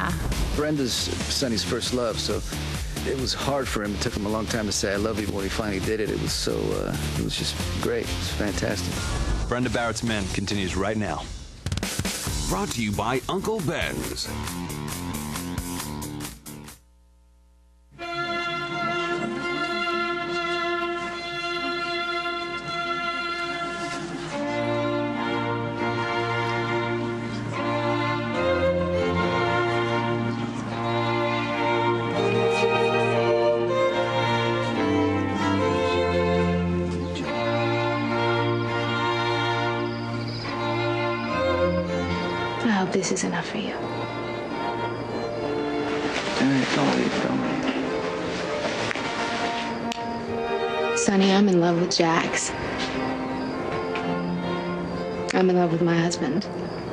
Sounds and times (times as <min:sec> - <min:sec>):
Orchestra: 0:00.0 - 0:11.2, 0:18.0 - 0:56.9.